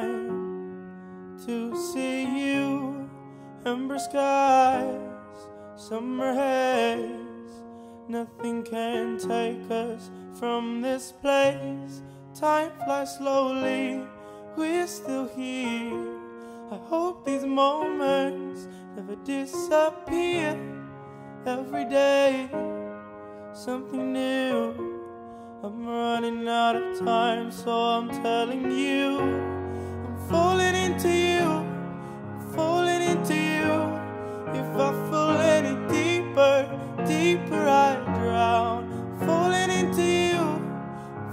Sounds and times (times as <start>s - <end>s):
Music: 0.0s - 41.3s.